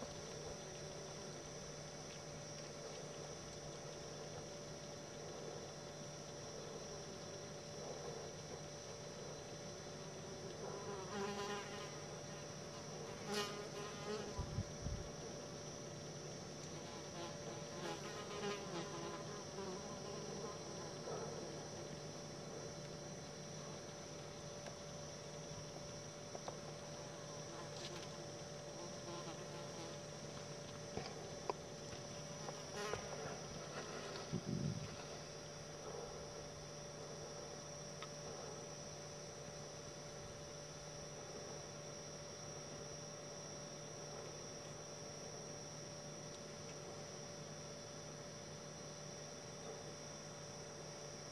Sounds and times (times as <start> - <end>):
Bee, wasp, etc.: 0.0 - 51.3
Fly, housefly: 0.0 - 51.3.